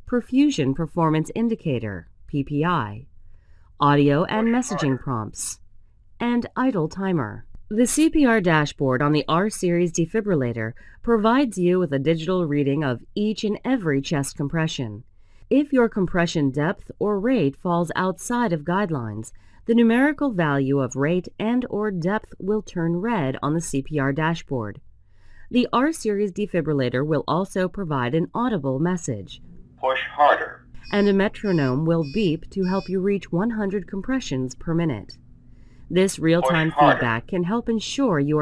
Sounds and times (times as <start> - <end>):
Narration, monologue: 0.0 - 38.4.